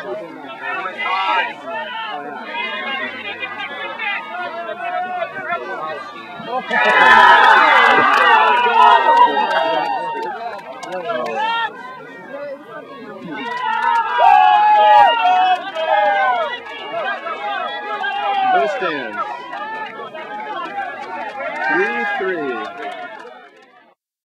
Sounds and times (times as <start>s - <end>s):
Speech: 15.1s - 24.0s.